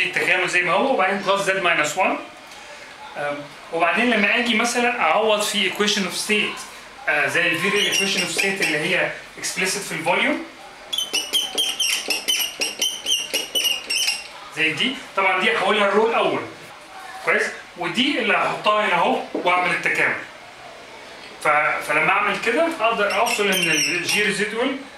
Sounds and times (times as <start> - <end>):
Speech: 0.0 - 2.4, 3.1 - 10.5, 14.4 - 20.3, 21.4 - 24.9.